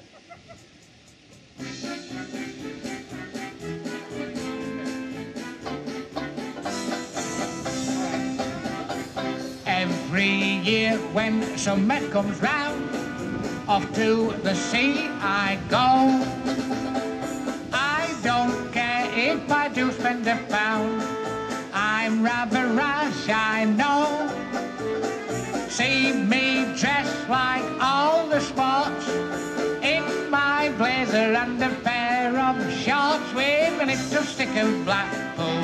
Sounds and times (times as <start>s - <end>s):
Rock and roll: 1.3s - 35.6s
Happy music: 1.5s - 35.6s.